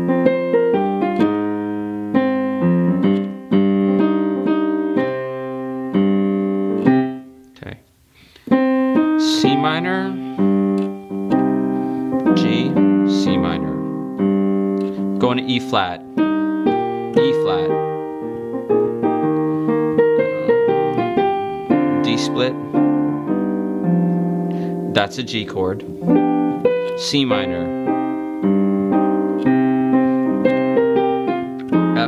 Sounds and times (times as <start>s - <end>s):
Music: 0.0s - 7.6s, 8.3s - 32.0s
Speech: 7.6s - 7.8s, 9.2s - 10.2s, 12.4s - 13.8s, 15.2s - 16.0s, 17.2s - 17.7s, 22.0s - 22.6s, 24.9s - 25.8s, 27.0s - 27.8s.